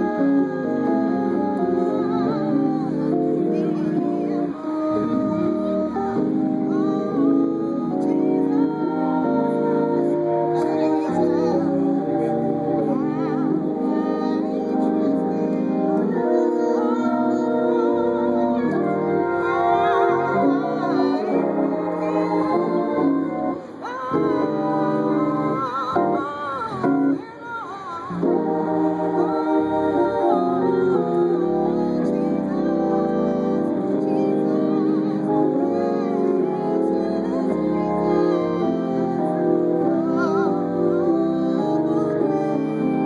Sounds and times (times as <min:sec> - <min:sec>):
Hammond organ: 0:00.0 - 0:27.2, 0:28.1 - 0:43.0.